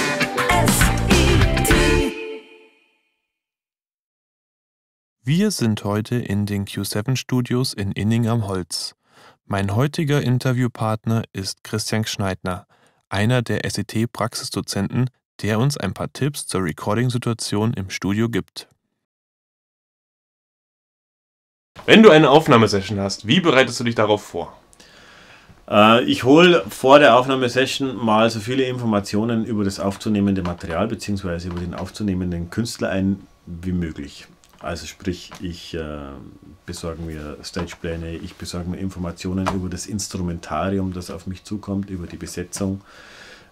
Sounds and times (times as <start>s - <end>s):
Speech: 5.2s - 18.7s, 21.8s - 24.6s, 25.7s - 42.9s.